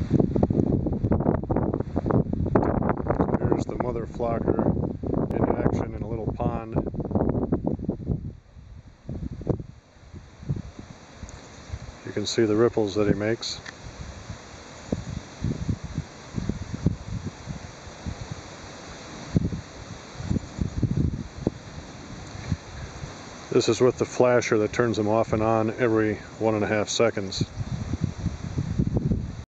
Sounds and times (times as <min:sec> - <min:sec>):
Speech: 0:03.3 - 0:04.7, 0:05.4 - 0:06.8, 0:12.1 - 0:13.6, 0:23.5 - 0:27.5.